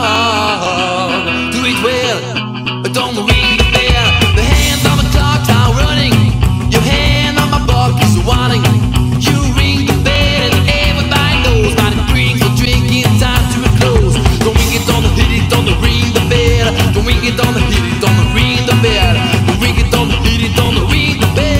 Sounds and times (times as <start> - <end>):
Music: 0.0 - 21.5.